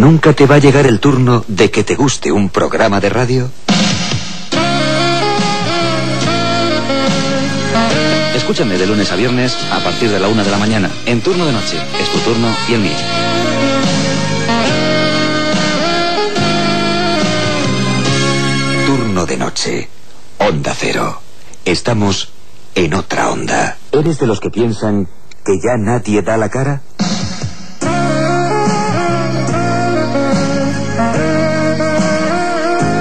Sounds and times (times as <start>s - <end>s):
Speech: 0.0s - 3.6s, 8.2s - 13.0s, 18.9s - 26.9s
Music: 3.2s - 19.4s, 27.0s - 33.0s.